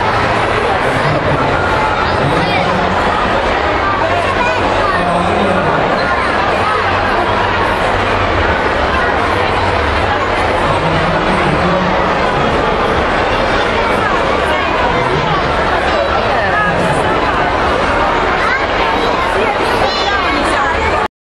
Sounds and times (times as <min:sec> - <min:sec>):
Speech: 0:00.0 - 0:21.1.